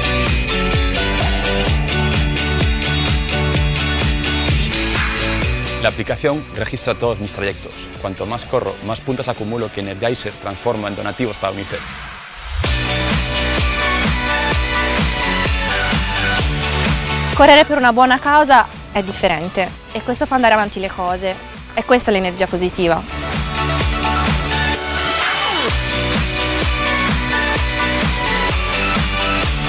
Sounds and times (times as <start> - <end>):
Music: 0.0 - 29.6
Speech: 5.8 - 11.9, 17.4 - 23.1.